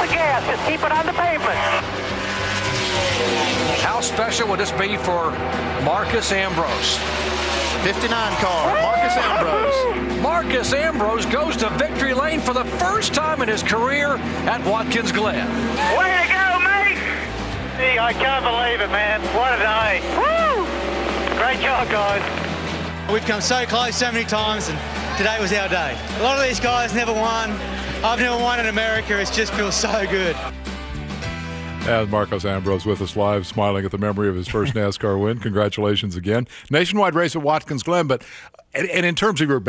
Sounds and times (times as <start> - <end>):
Speech: 3.8 - 7.0, 7.8 - 20.0, 23.1 - 30.4, 31.8 - 39.6.